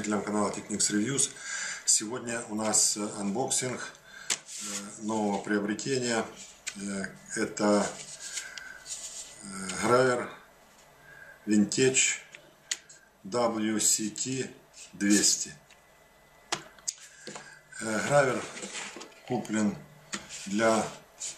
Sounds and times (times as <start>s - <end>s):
Speech: 0.0s - 4.0s, 4.6s - 8.0s, 9.4s - 10.4s, 11.5s - 12.4s, 13.3s - 15.6s, 17.8s - 18.7s, 19.3s - 21.0s.